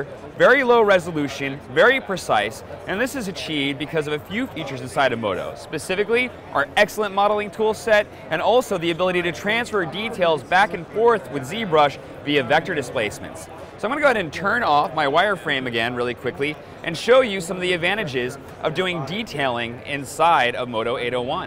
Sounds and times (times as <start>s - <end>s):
Speech: 0.0s - 21.4s.